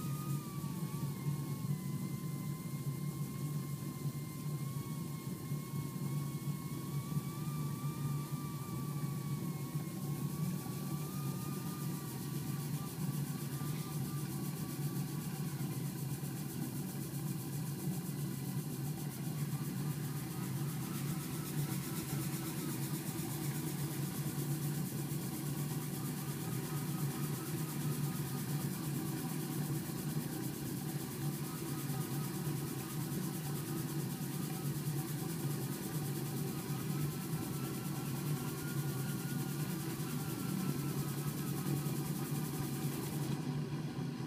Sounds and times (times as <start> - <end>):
Engine: 0.0 - 44.2.